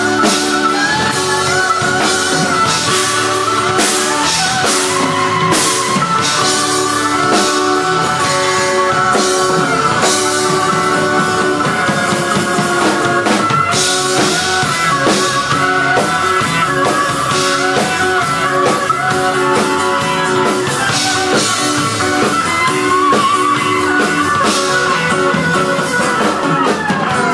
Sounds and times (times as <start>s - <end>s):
Guitar: 0.0s - 27.3s.